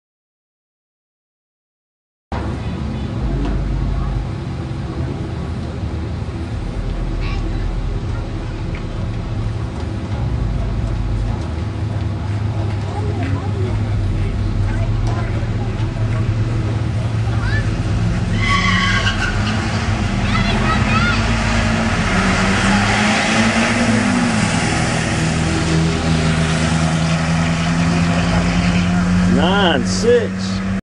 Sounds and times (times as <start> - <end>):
Speech: 29.3 - 30.6.